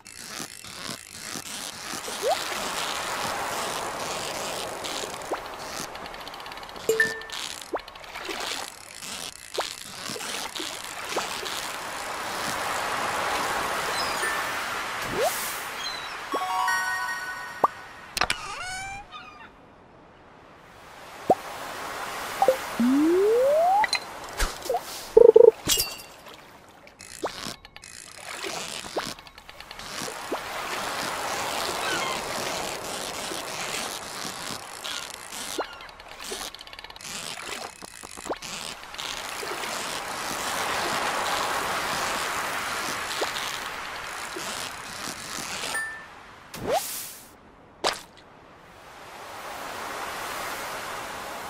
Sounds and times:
Rain on surface: 2.0 - 17.3, 28.6 - 46.2, 49.1 - 51.5.

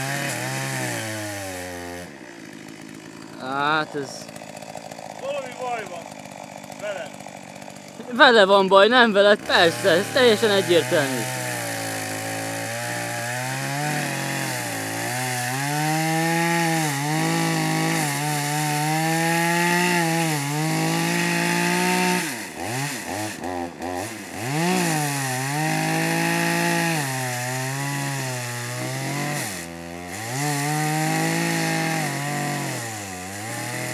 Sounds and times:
Chainsaw: 0.0 - 33.9
Speech: 8.0 - 11.3.

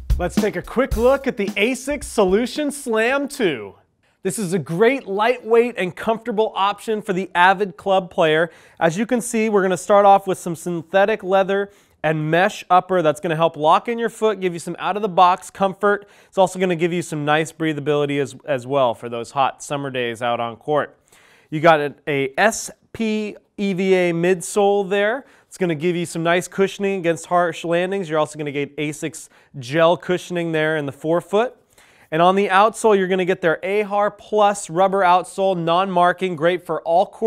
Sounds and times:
Speech: 0.1 - 37.2.

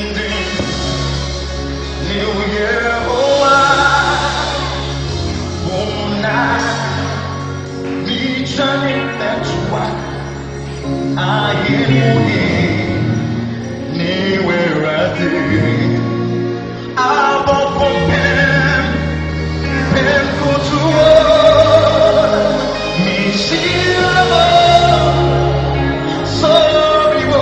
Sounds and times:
Music: 0.0 - 27.4
Singing: 1.8 - 10.2, 10.9 - 27.4.

